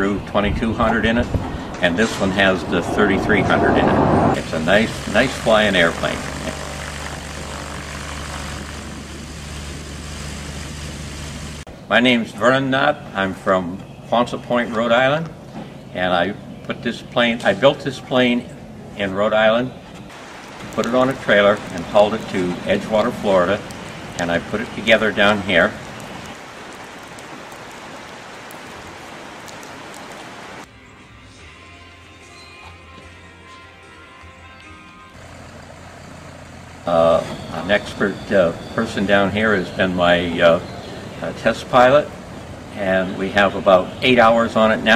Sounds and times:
Speech: 0:00.0 - 0:06.3, 0:11.9 - 0:15.3, 0:16.0 - 0:19.7, 0:20.8 - 0:23.6, 0:24.2 - 0:25.8, 0:36.9 - 0:42.1, 0:42.8 - 0:44.9
Music: 0:30.7 - 0:35.2.

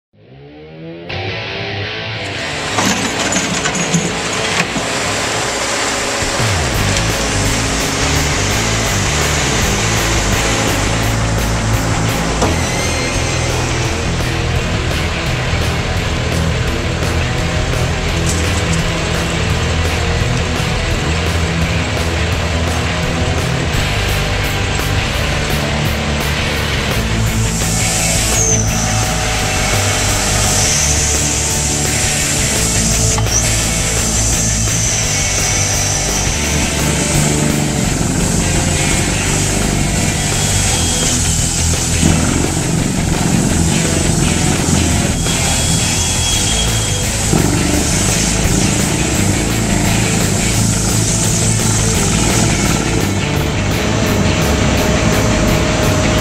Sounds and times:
Music: 0:00.0 - 0:56.2
Engine: 0:02.2 - 0:56.2
Outside, rural or natural: 0:02.3 - 0:56.2.

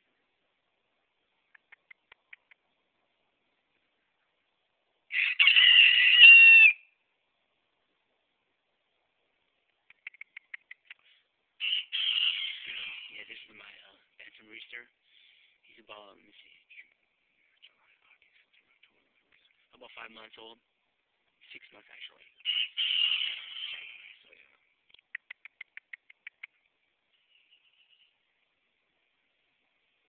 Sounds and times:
Speech: 0:13.1 - 0:15.0, 0:15.6 - 0:16.9, 0:19.7 - 0:20.7, 0:21.4 - 0:22.4, 0:24.2 - 0:24.6.

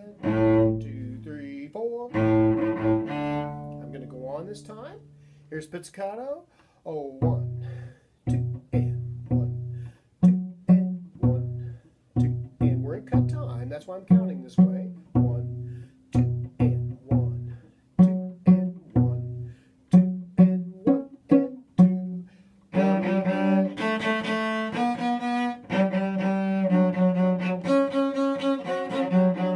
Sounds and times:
Cello: 0:00.0 - 0:05.4, 0:07.2 - 0:29.5.

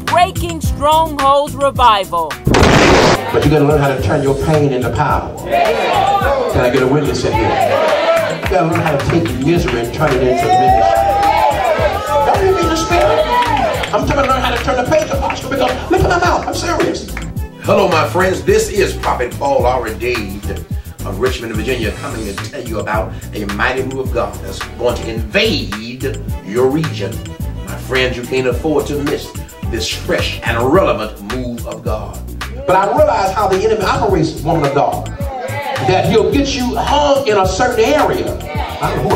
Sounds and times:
Speech: 0:00.0 - 0:02.4, 0:17.7 - 0:35.1, 0:35.8 - 0:39.1
Music: 0:00.0 - 0:39.1.

